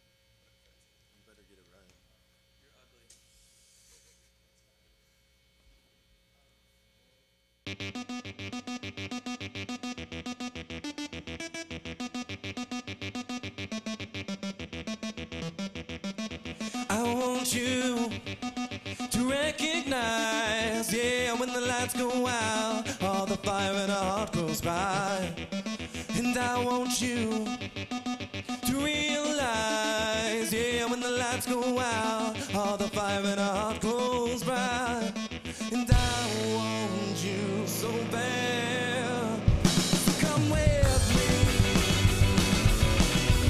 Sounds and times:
Theme music: 0:07.7 - 0:19.6, 0:35.8 - 0:43.4.

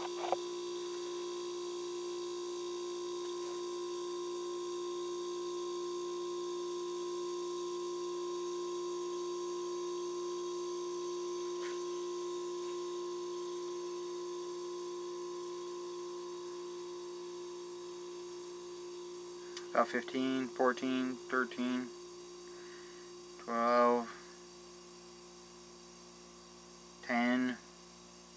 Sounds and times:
Speech: 0:19.8 - 0:21.9, 0:23.5 - 0:24.2, 0:27.1 - 0:27.6.

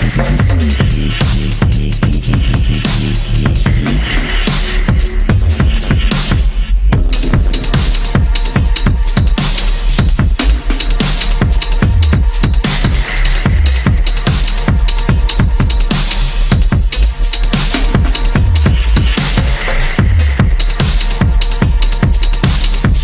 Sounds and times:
Drum and bass: 0:00.0 - 0:23.0
Dubstep: 0:00.0 - 0:23.0.

